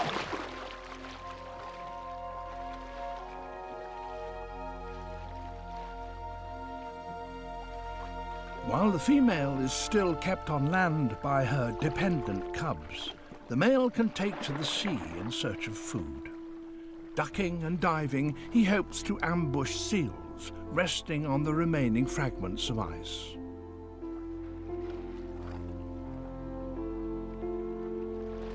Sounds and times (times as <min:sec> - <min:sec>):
Music: 0:00.0 - 0:28.5
Speech: 0:08.7 - 0:16.3, 0:17.2 - 0:23.4.